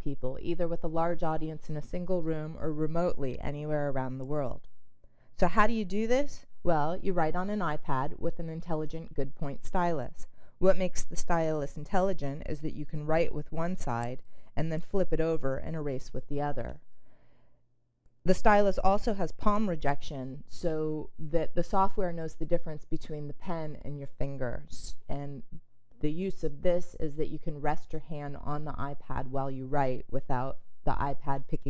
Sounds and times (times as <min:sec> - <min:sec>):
Speech: 0:00.0 - 0:04.6, 0:05.4 - 0:16.8, 0:18.3 - 0:31.6.